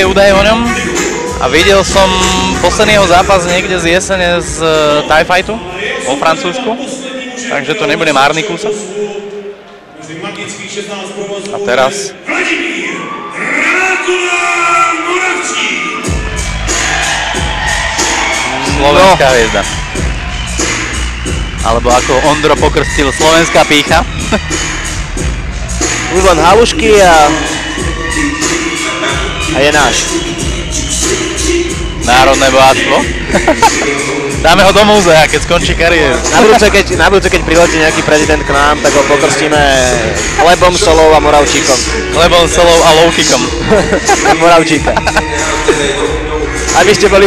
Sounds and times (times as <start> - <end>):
Music: 0.0 - 8.9, 13.0 - 47.2
Speech: 1.4 - 9.2, 21.6 - 24.0, 32.1 - 33.1, 34.4 - 43.5, 46.7 - 47.2.